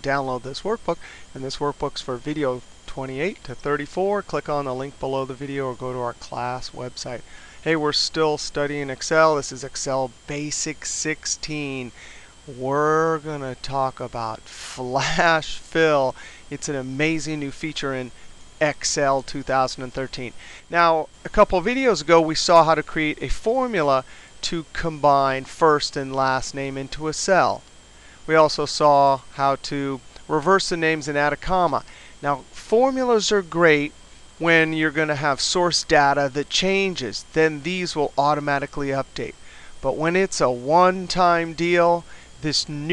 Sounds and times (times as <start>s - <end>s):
Speech: 0.0s - 11.9s, 12.5s - 27.6s, 28.3s - 42.9s.